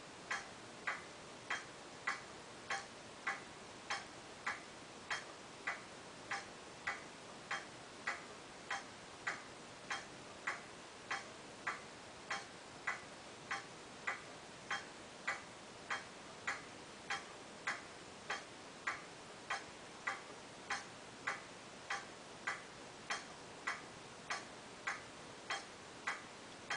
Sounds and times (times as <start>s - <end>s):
Tick-tock: 0.3s - 26.7s.